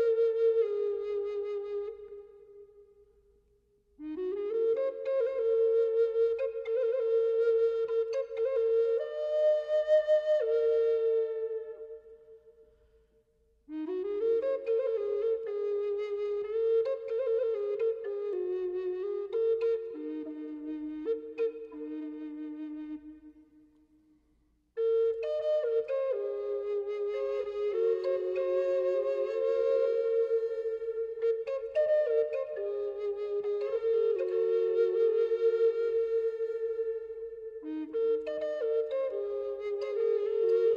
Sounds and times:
Music: 0.0 - 40.7.

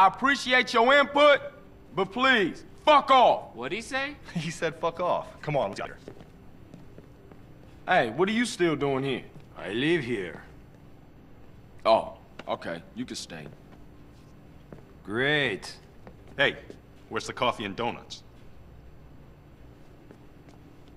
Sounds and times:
Speech: 0.0 - 6.1, 7.9 - 10.5, 11.8 - 13.6, 15.0 - 15.8, 16.4 - 18.3.

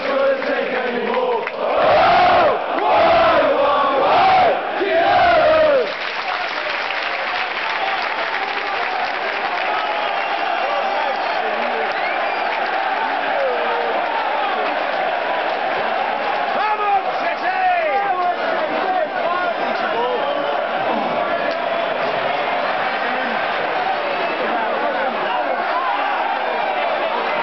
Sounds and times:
Speech: 16.6 - 21.2, 24.3 - 26.0.

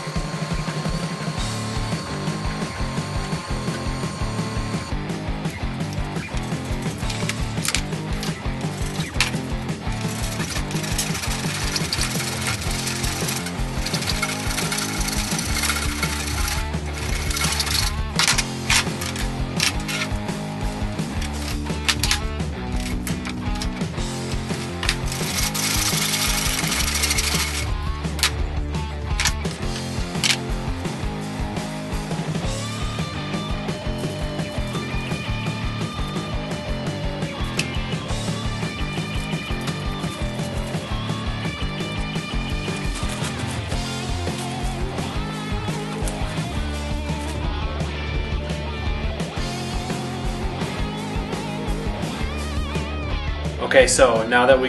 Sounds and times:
Music: 0.0 - 54.6.

